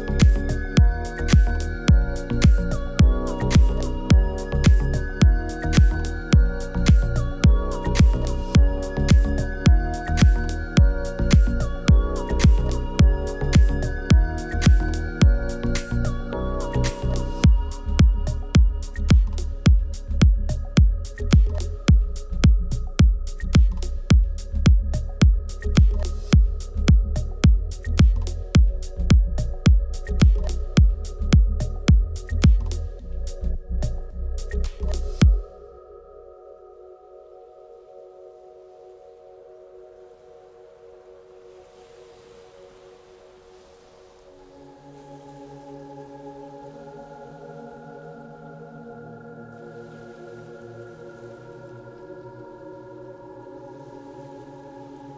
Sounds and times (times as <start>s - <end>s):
House music: 0.0s - 33.4s, 34.4s - 35.4s
Trance music: 0.0s - 36.6s.